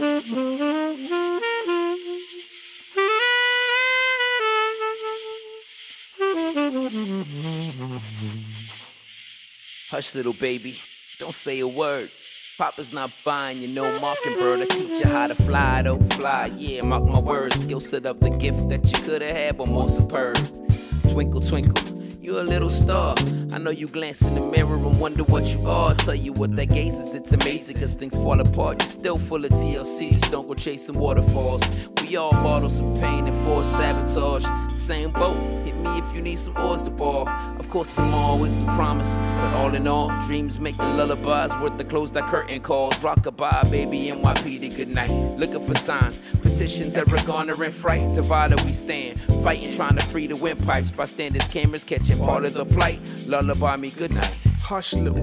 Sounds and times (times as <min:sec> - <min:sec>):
Lullaby: 0:13.8 - 0:18.0.